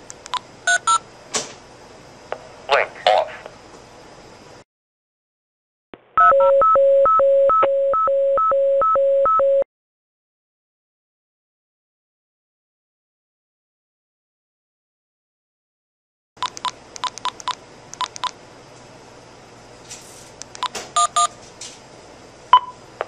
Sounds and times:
Speech: 0:02.7 - 0:03.5.

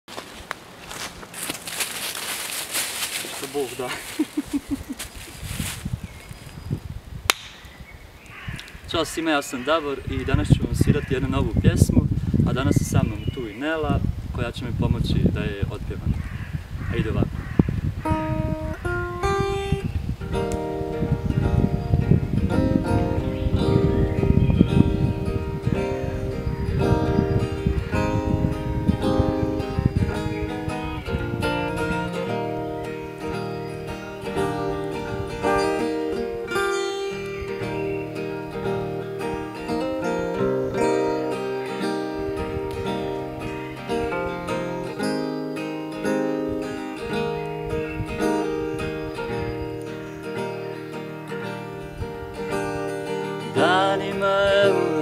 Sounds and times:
Speech: 0:03.2 - 0:04.1, 0:08.9 - 0:16.1, 0:16.9 - 0:17.3.

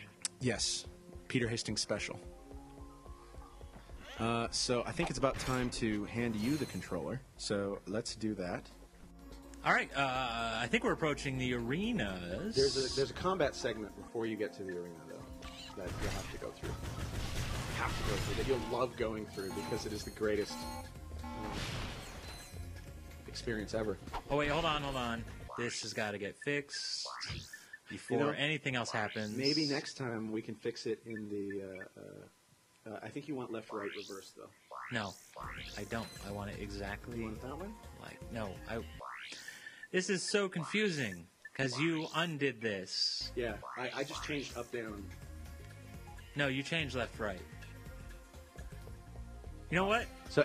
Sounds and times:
Speech: 0:09.6 - 0:15.2, 0:27.9 - 0:35.2, 0:40.0 - 0:45.1, 0:46.4 - 0:47.4.

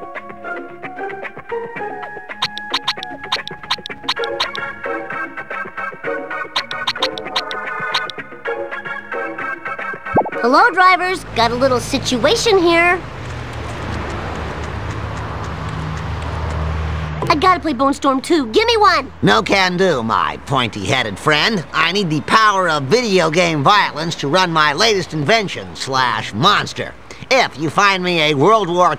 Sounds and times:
Music: 0:00.0 - 0:11.4
Speech: 0:10.4 - 0:13.0, 0:17.2 - 0:28.9.

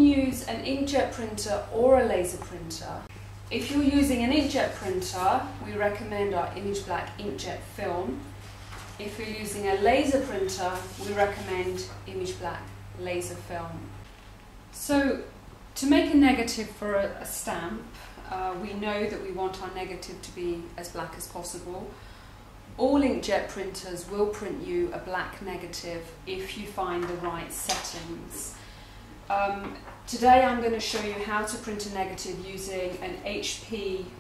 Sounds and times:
Speech: 0:00.0 - 0:08.3, 0:09.0 - 0:14.0, 0:14.8 - 0:22.0, 0:22.8 - 0:28.6, 0:29.3 - 0:34.2.

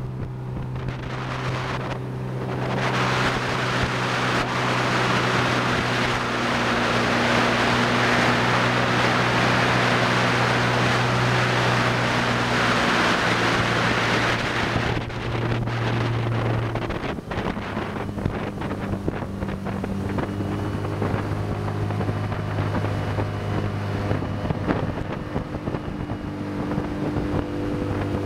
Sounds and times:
Motorboat, speedboat: 0:00.0 - 0:28.2
Wind noise (microphone): 0:00.0 - 0:28.2.

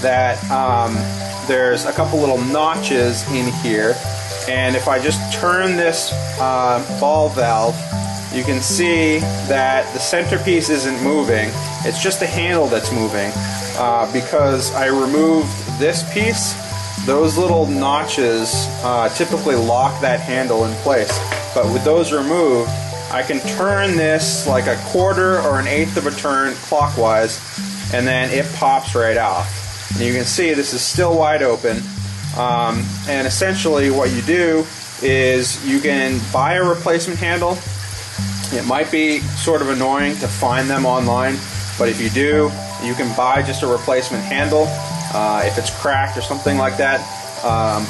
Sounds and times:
Speech: 0:00.0 - 0:07.8, 0:08.4 - 0:31.8, 0:32.4 - 0:37.7, 0:38.5 - 0:47.9
Music: 0:00.0 - 0:47.9
Water tap, faucet: 0:00.0 - 0:47.9.

